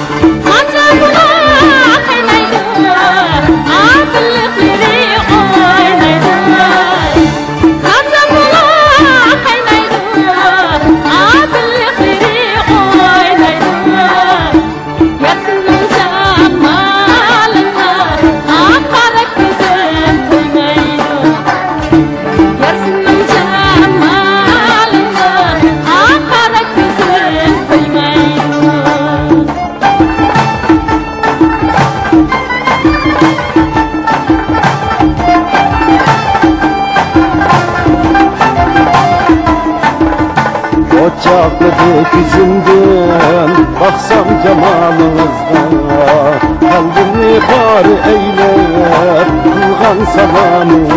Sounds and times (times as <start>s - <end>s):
Folk music: 0.0s - 50.9s
Traditional music: 0.0s - 50.9s.